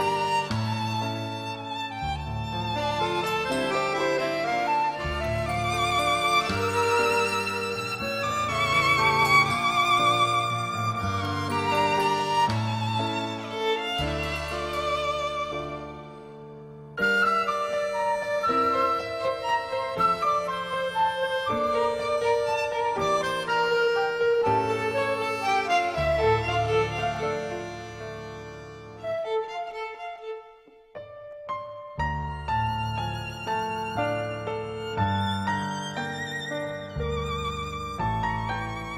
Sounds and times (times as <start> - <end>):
Musical instrument: 0.0 - 31.0.